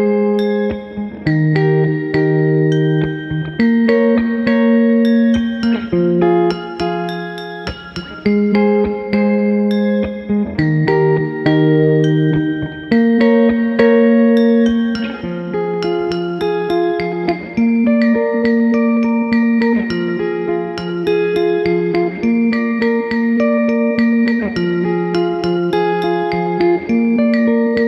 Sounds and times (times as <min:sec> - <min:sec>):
Electric guitar: 0:00.0 - 0:27.8.